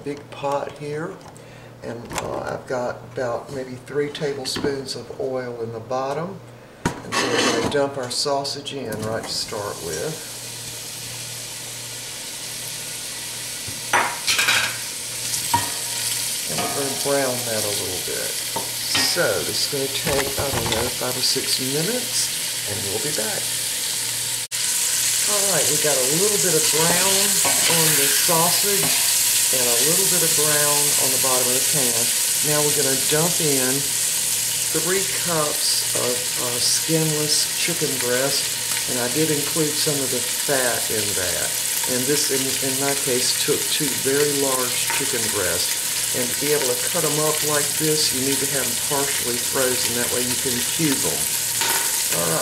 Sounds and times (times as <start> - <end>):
Frying (food): 7.1 - 52.4
Sizzle: 8.2 - 52.4.